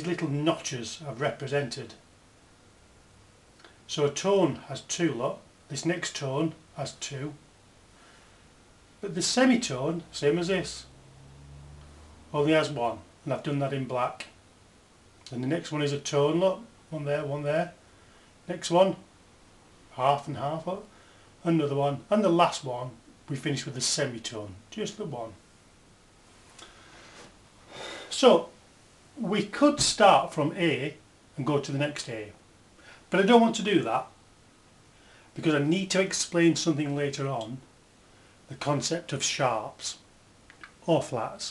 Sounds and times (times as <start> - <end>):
Speech: 0.0 - 2.0, 3.9 - 7.4, 9.0 - 10.9, 12.3 - 14.4, 15.3 - 17.8, 18.5 - 19.1, 19.9 - 25.4, 28.1 - 28.6, 29.2 - 32.4, 33.1 - 34.2, 35.4 - 37.7, 38.5 - 40.1, 40.8 - 41.5
Inside, small room: 0.0 - 41.5.